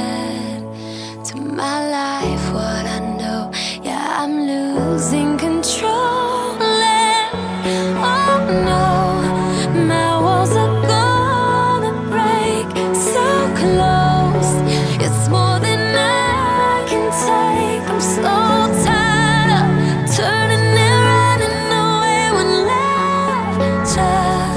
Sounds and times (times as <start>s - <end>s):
Pop music: 0.0s - 24.5s.